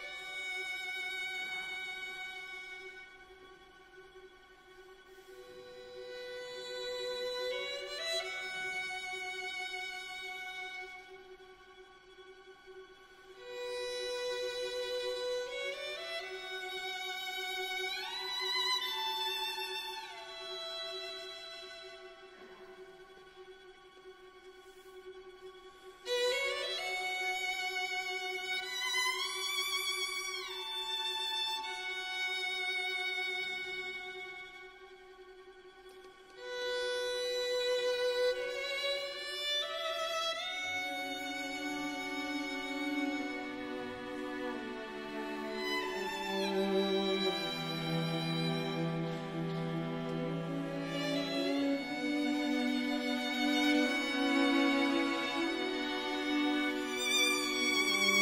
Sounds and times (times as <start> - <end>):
Orchestra: 0.0 - 58.2
Violin, fiddle: 0.0 - 58.2.